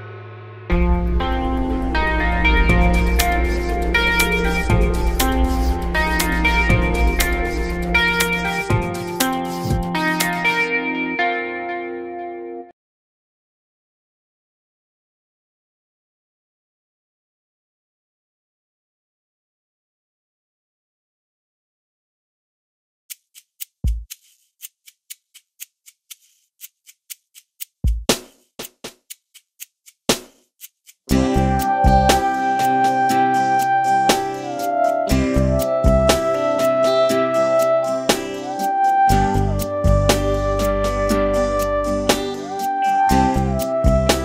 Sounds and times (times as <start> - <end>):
Music: 0.0 - 12.7, 31.1 - 44.2.